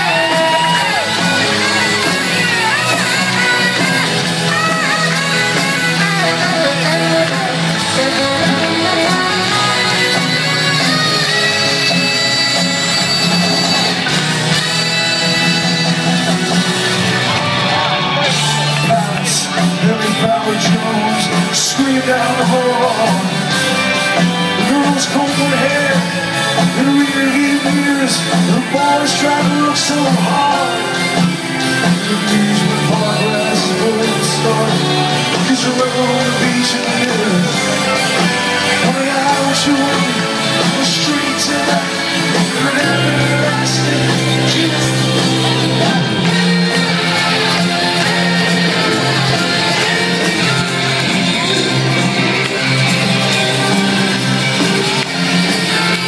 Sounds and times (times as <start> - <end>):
Singing: 0.0 - 14.0, 17.8 - 56.0
Inside, large room or hall: 0.0 - 56.0
Music: 0.0 - 56.0.